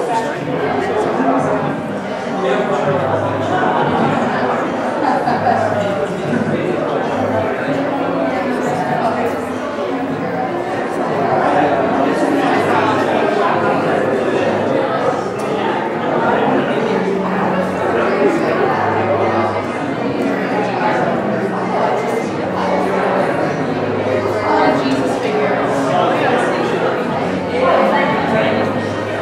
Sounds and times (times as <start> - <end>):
Inside, large room or hall: 0.0 - 29.2
Speech: 0.0 - 29.2.